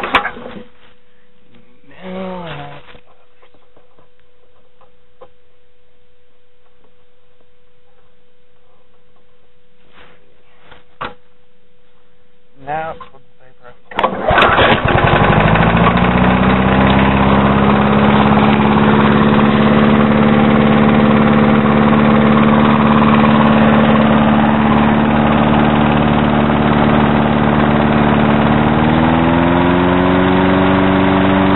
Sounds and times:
Speech: 1.8 - 3.4, 12.6 - 13.9
Outside, rural or natural: 13.8 - 31.5.

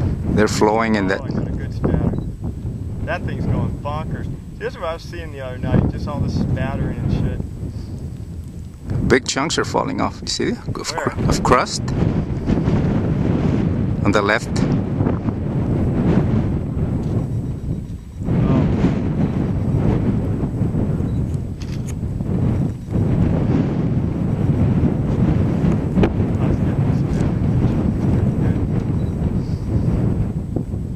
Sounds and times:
Speech: 0.4 - 2.2, 3.0 - 7.4, 9.1 - 11.9, 14.0 - 14.7, 18.4 - 18.7, 26.4 - 27.7.

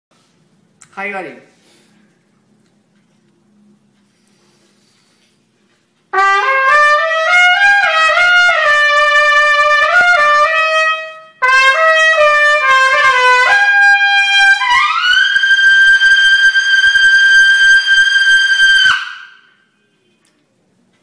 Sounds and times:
Trumpet: 6.1 - 19.8.

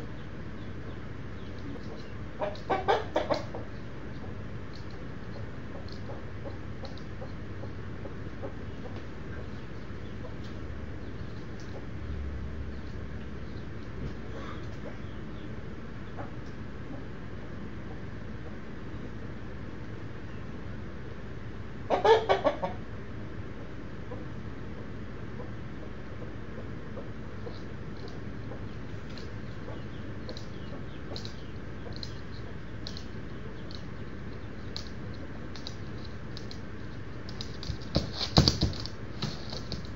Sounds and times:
Animal: 12.8 - 15.2.

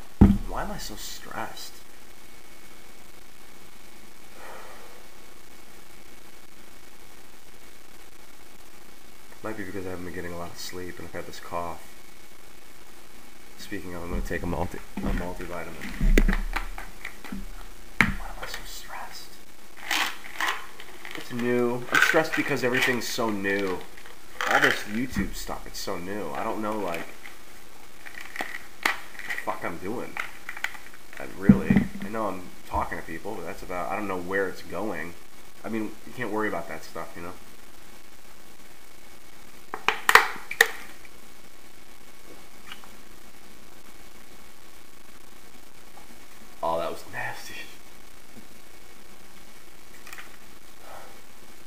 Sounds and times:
Inside, small room: 0.0 - 51.6
Speech: 0.2 - 1.8, 9.4 - 11.9, 13.6 - 16.1, 18.2 - 19.4, 21.2 - 27.1, 29.4 - 30.2, 31.2 - 37.4, 46.6 - 47.8.

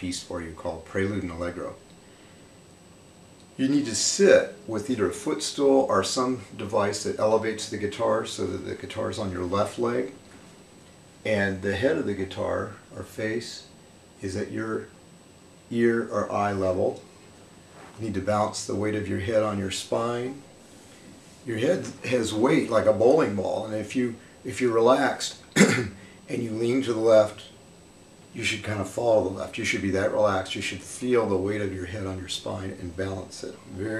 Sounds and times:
Speech: 0.0 - 1.8, 3.6 - 10.2, 11.3 - 15.0, 15.7 - 17.1, 18.0 - 20.5, 21.4 - 27.6, 28.3 - 34.0.

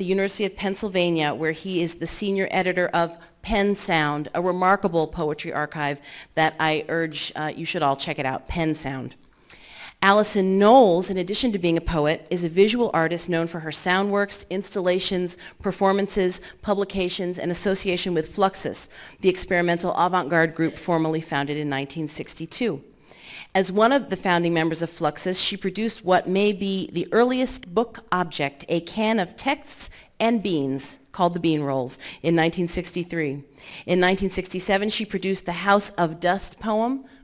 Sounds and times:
Speech: 0.0 - 9.2, 10.0 - 22.9, 23.6 - 37.0.

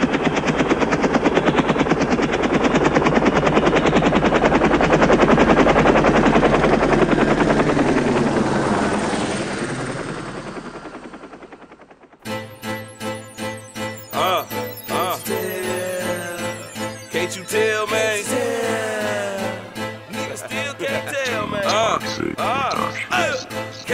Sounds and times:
Music: 12.2 - 23.9.

